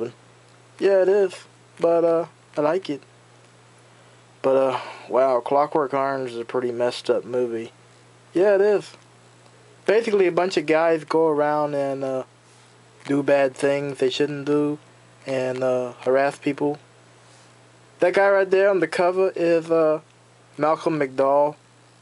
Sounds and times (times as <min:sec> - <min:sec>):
Speech: 0:00.8 - 0:03.1, 0:04.4 - 0:07.8, 0:08.4 - 0:09.0, 0:09.9 - 0:12.3, 0:13.0 - 0:16.8, 0:18.0 - 0:21.6.